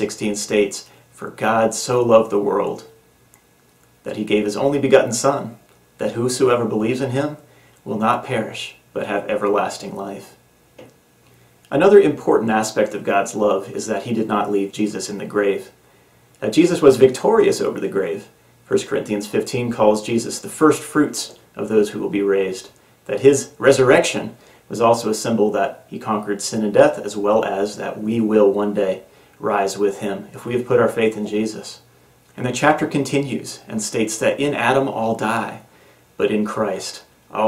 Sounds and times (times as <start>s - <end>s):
Speech: 0.0s - 3.0s, 4.0s - 10.4s, 11.7s - 15.8s, 16.4s - 37.4s.